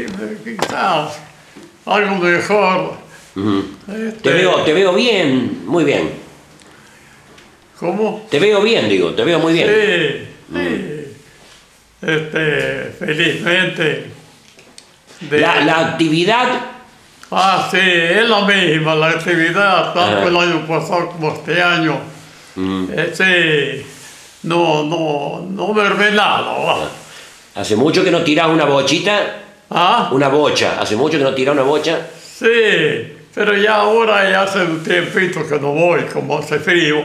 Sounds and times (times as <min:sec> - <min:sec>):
Speech: 0:00.0 - 0:01.3, 0:01.9 - 0:06.3, 0:07.8 - 0:11.2, 0:12.0 - 0:14.2, 0:15.2 - 0:37.0.